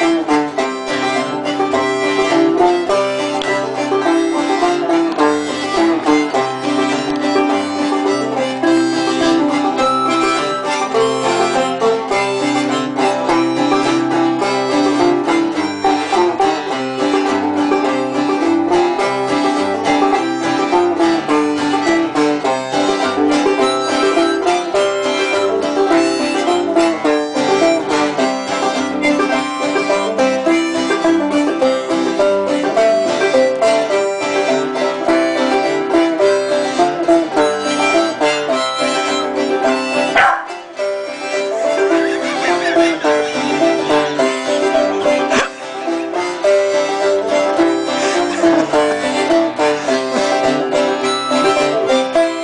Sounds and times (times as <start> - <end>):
Banjo: 0.0 - 52.4.